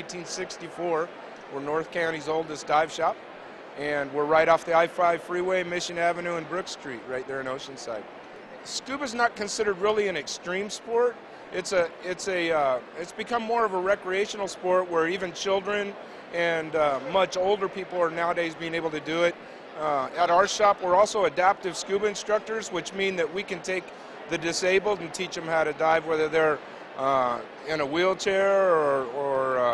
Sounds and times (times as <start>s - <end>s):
Speech: 0.0s - 3.2s, 3.8s - 8.0s, 8.6s - 29.7s.